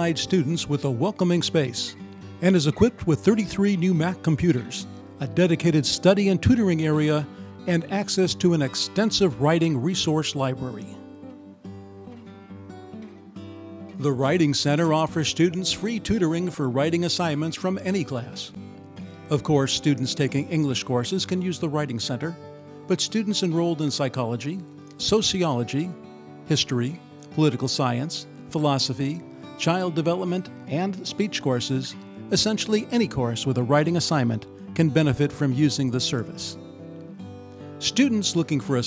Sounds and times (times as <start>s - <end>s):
Speech: 0.0s - 11.0s, 14.0s - 18.6s, 19.3s - 36.6s, 37.8s - 38.8s
Music: 0.0s - 38.8s.